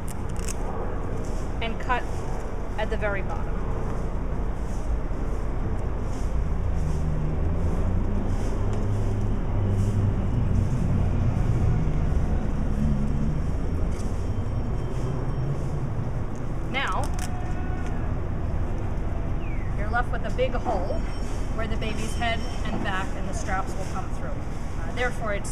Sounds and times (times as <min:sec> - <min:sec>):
Speech: 0:01.6 - 0:02.1, 0:02.8 - 0:03.4, 0:19.8 - 0:21.0, 0:21.6 - 0:25.5
Car passing by: 0:06.0 - 0:16.6.